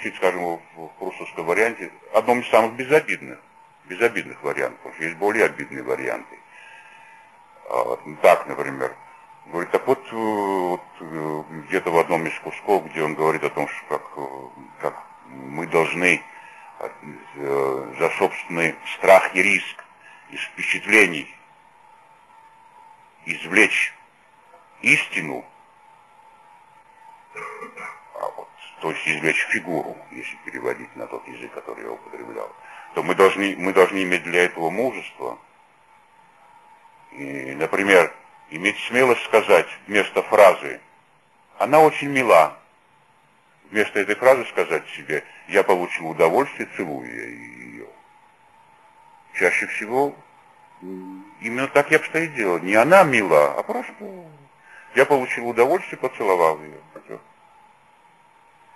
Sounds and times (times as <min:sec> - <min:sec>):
Speech: 0:00.0 - 0:06.5, 0:07.6 - 0:21.5, 0:23.2 - 0:25.6, 0:27.4 - 0:35.5, 0:37.1 - 0:40.9, 0:41.6 - 0:42.7, 0:43.7 - 0:48.0, 0:49.3 - 0:50.2, 0:50.8 - 0:57.3.